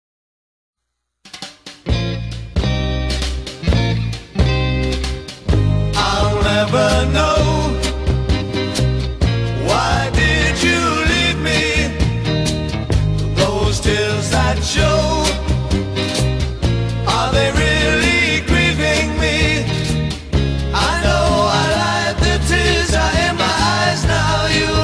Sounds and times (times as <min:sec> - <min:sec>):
Music: 0:00.8 - 0:24.8.